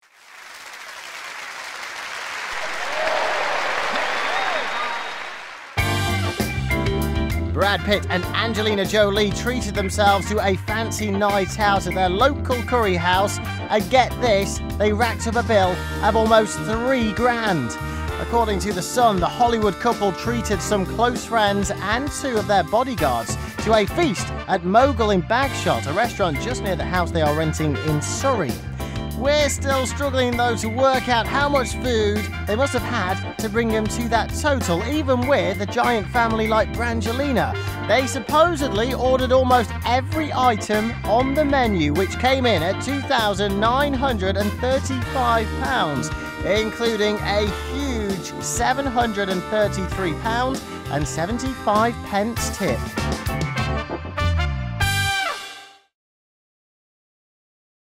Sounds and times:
Music: 2.5 - 56.0
Speech: 7.6 - 28.6, 29.2 - 53.0.

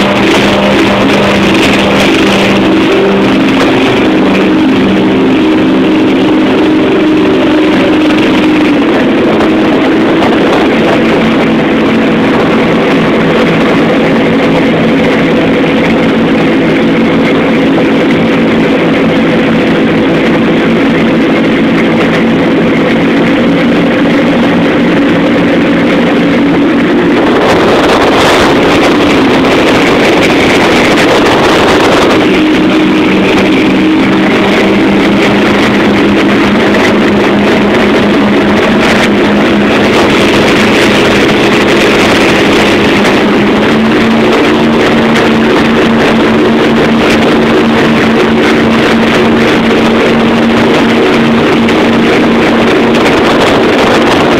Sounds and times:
Motorboat, speedboat: 0.0 - 54.3.

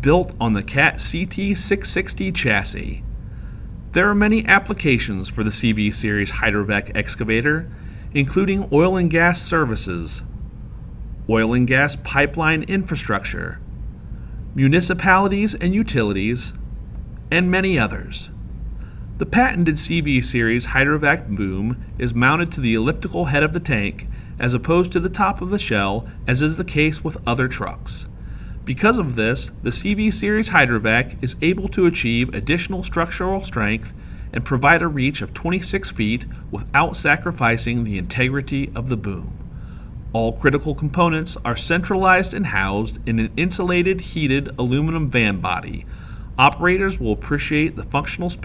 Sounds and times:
Speech: 0.0 - 3.0, 3.9 - 10.3, 11.3 - 13.6, 14.6 - 16.6, 17.3 - 18.4, 19.2 - 39.4, 40.1 - 48.4.

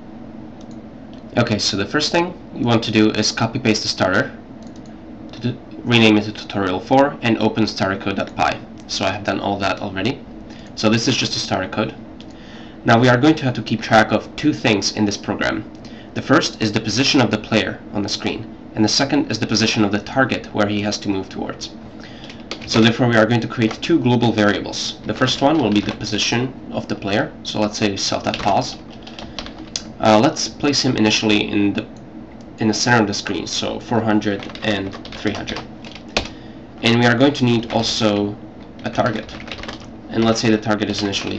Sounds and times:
Speech: 1.4 - 4.4, 5.3 - 10.2, 10.8 - 12.0, 12.8 - 21.8, 22.6 - 28.8, 29.8 - 32.0, 32.6 - 35.7, 36.8 - 39.5, 40.1 - 41.3.

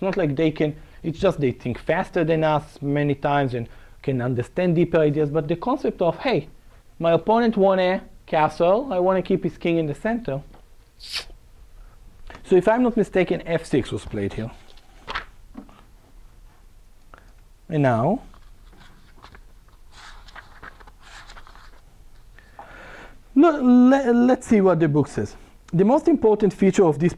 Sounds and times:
Speech: 0.0 - 10.6, 12.4 - 14.6, 17.7 - 18.3, 23.4 - 27.1.

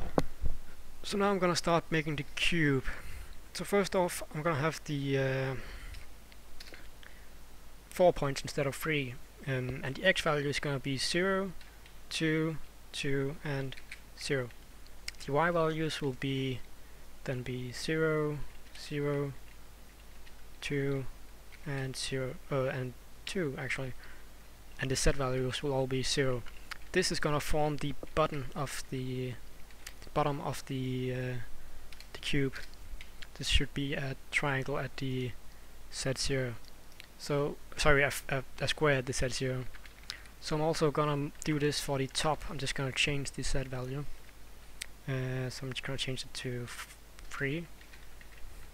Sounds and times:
Speech: 1.0 - 3.0, 3.6 - 5.7, 7.9 - 14.6, 15.2 - 19.4, 20.6 - 24.0, 24.8 - 29.4, 30.0 - 31.5, 32.1 - 32.7, 33.4 - 36.6, 37.2 - 39.7, 40.4 - 44.1, 45.0 - 47.7.

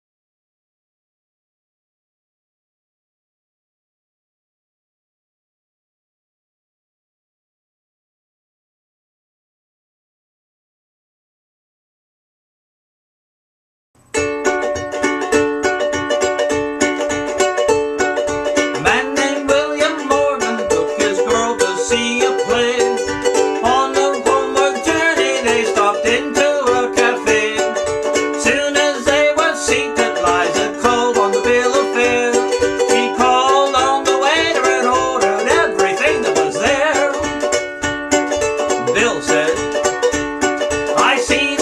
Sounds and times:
Mandolin: 14.0 - 41.6
Ukulele: 14.0 - 41.6.

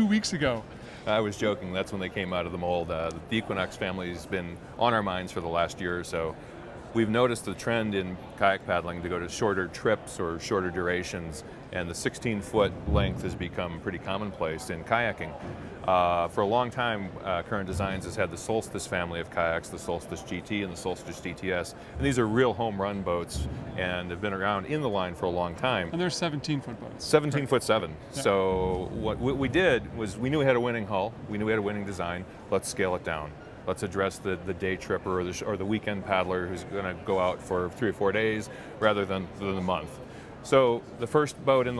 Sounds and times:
Speech: 0.0 - 41.8.

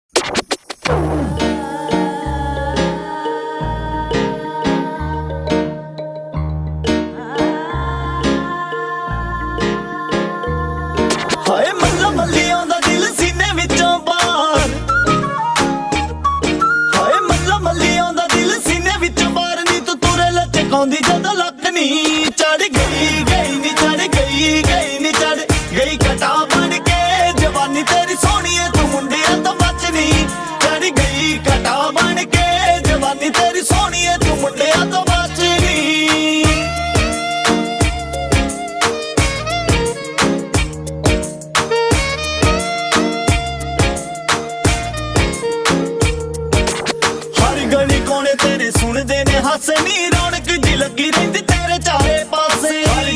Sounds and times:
Music: 0.2 - 53.1.

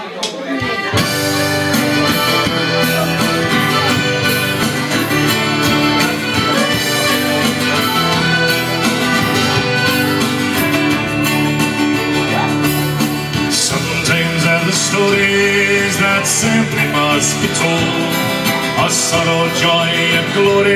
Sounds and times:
Accordion: 0.4 - 20.7
Singing: 13.5 - 20.7.

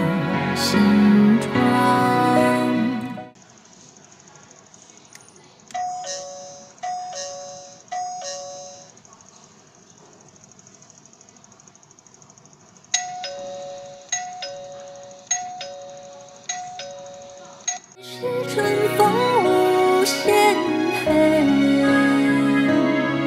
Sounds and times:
Music: 0.0 - 3.4, 18.0 - 23.2
Doorbell: 5.8 - 9.0, 13.0 - 17.8.

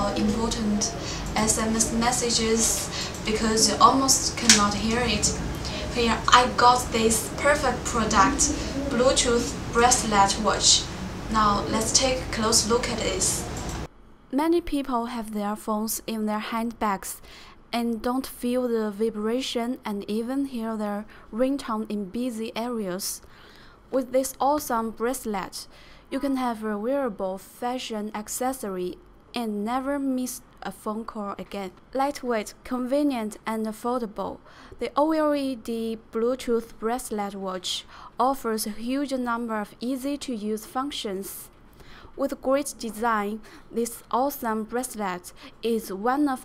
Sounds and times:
Speech: 0.0 - 13.6, 14.3 - 23.2, 23.9 - 41.5, 42.2 - 46.4.

